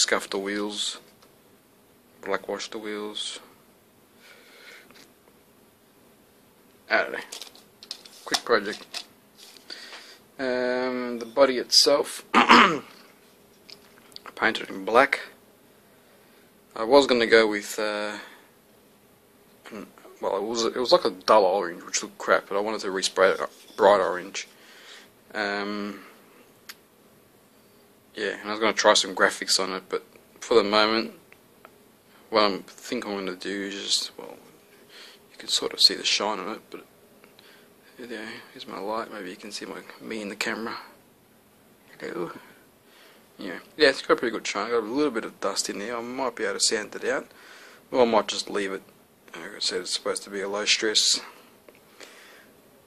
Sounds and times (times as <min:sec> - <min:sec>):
Speech: 0:00.0 - 0:01.1, 0:02.2 - 0:03.6, 0:06.9 - 0:07.4, 0:08.2 - 0:08.9, 0:10.4 - 0:12.4, 0:14.2 - 0:15.4, 0:16.7 - 0:18.4, 0:19.6 - 0:24.5, 0:25.3 - 0:26.1, 0:28.2 - 0:31.2, 0:32.3 - 0:34.5, 0:35.3 - 0:36.9, 0:38.0 - 0:41.0, 0:41.9 - 0:42.5, 0:43.4 - 0:47.3, 0:47.9 - 0:51.4
Inside, small room: 0:00.0 - 0:52.8.